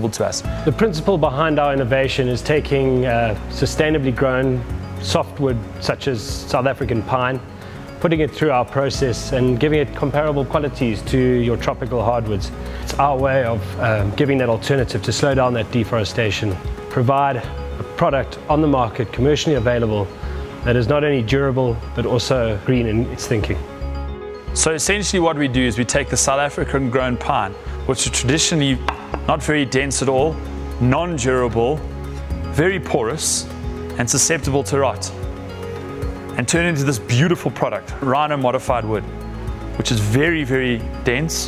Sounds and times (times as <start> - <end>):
Speech: 0.0 - 7.4, 8.0 - 23.6, 24.6 - 31.8, 32.5 - 35.2, 36.4 - 39.1, 39.8 - 41.4
Music: 0.0 - 41.4.